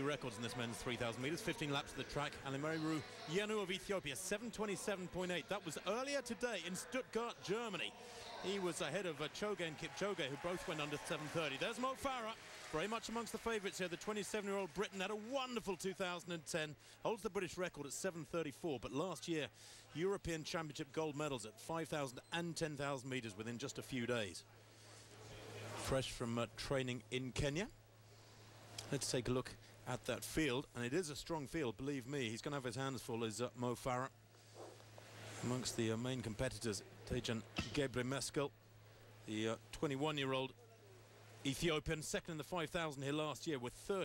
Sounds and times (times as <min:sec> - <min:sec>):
Speech: 0:00.0 - 0:24.6, 0:25.2 - 0:27.8, 0:28.8 - 0:34.2, 0:35.4 - 0:38.6, 0:39.3 - 0:40.8, 0:41.4 - 0:44.0.